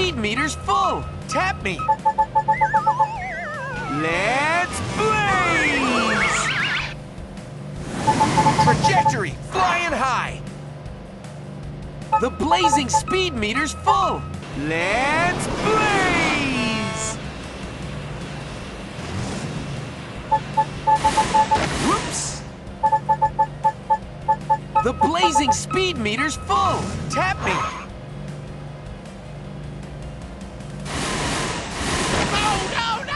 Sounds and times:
Speech: 0:24.8 - 0:27.9, 0:32.3 - 0:33.1.

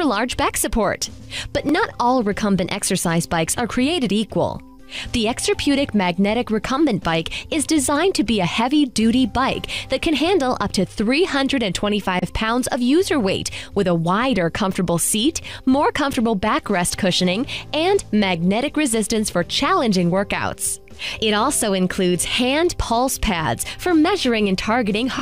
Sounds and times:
Music: 0:00.0 - 0:25.2
Speech: 0:00.0 - 0:25.2.

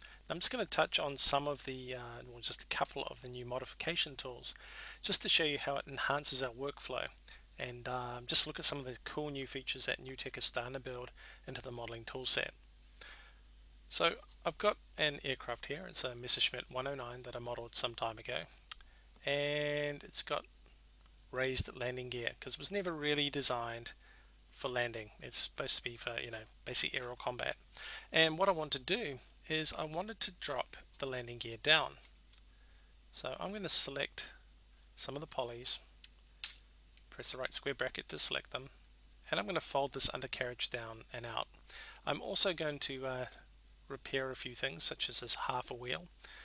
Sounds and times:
Speech: 0:00.3 - 0:12.6, 0:13.9 - 0:20.5, 0:21.4 - 0:24.0, 0:24.6 - 0:32.1, 0:33.1 - 0:34.4, 0:35.0 - 0:35.9, 0:37.1 - 0:46.1.

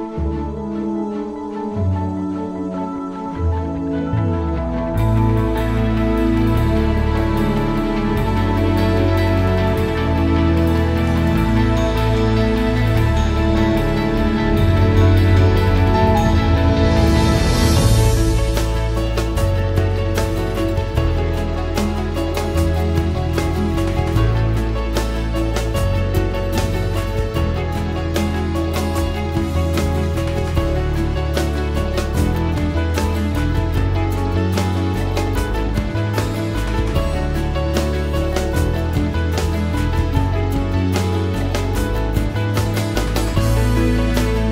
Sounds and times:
Music: 0:00.0 - 0:44.5.

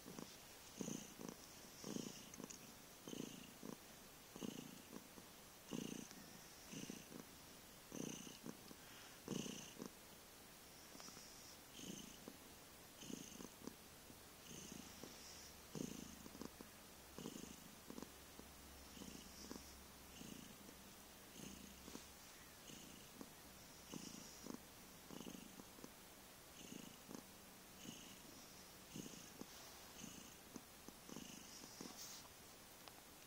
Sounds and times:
Purr: 0:00.0 - 0:07.3, 0:07.9 - 0:10.0, 0:10.8 - 0:12.4, 0:13.0 - 0:13.8, 0:14.4 - 0:25.9, 0:26.6 - 0:32.3.

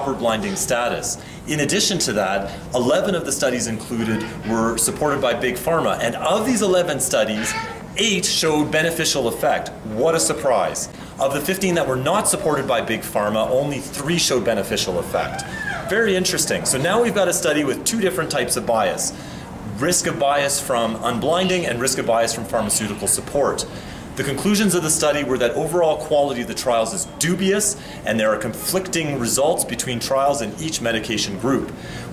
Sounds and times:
Speech: 0:00.0 - 0:31.8.

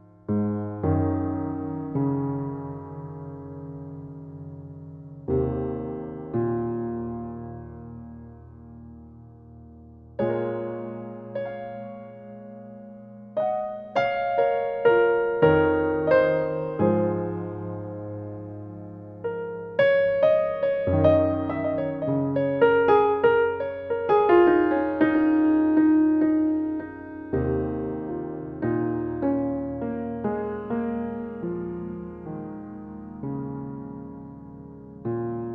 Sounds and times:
Electric piano: 0:00.0 - 0:35.5.

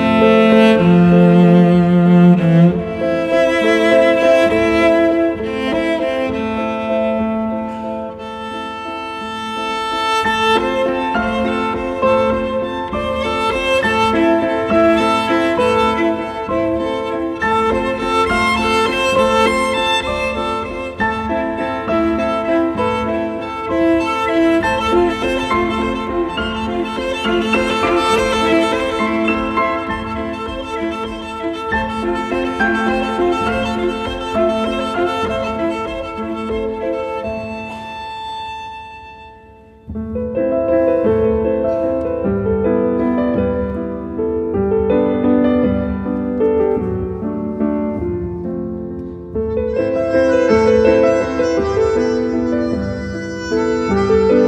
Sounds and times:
Violin, fiddle: 0:00.0 - 0:39.9, 0:49.0 - 0:54.4.

